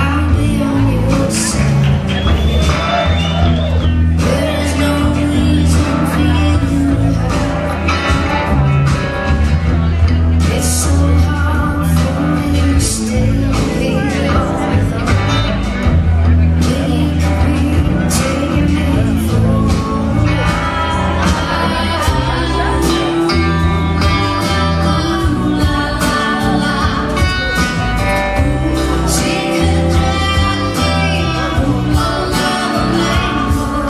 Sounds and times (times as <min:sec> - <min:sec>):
Music: 0:00.0 - 0:33.8
Speech: 0:00.0 - 0:33.8.